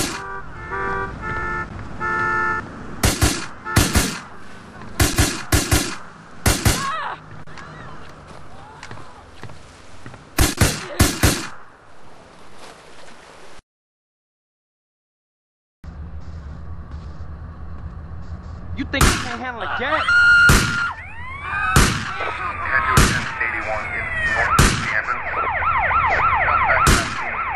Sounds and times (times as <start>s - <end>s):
Speech: 18.8s - 20.1s, 22.2s - 27.1s.